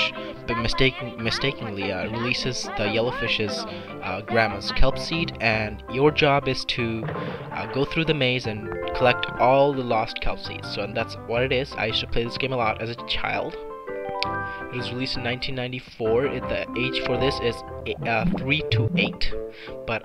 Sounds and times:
Speech: 0.0 - 13.6, 14.8 - 20.0
Music: 0.0 - 20.0.

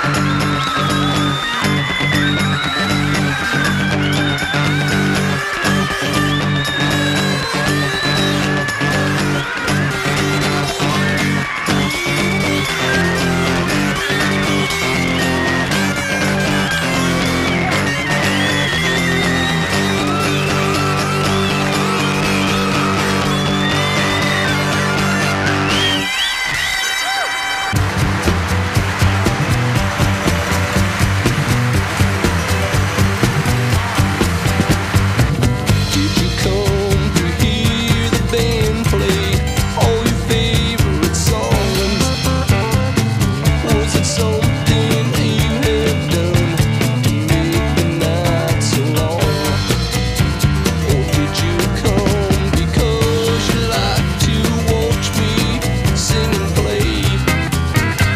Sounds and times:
Funny music: 0.0 - 58.1.

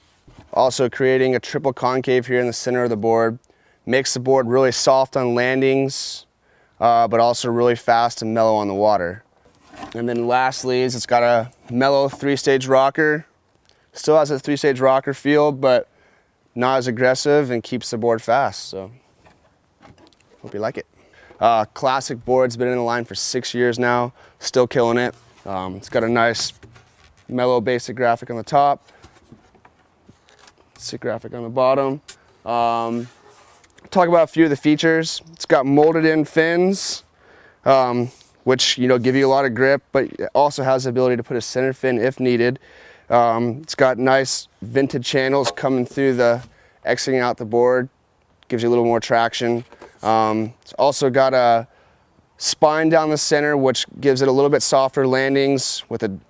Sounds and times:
Speech: 0.5 - 9.2, 9.9 - 13.3, 13.9 - 15.9, 16.6 - 19.0, 20.4 - 26.6, 27.3 - 28.8, 30.8 - 33.2, 33.9 - 47.9, 48.5 - 51.7, 52.4 - 56.2.

